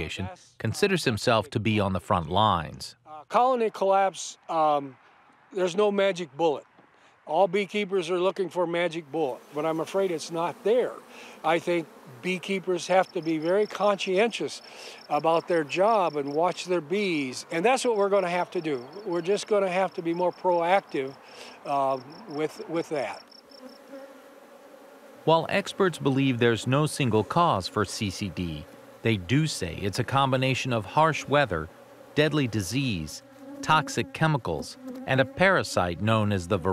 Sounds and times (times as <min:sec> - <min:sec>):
Bee, wasp, etc.: 0:08.0 - 0:36.7.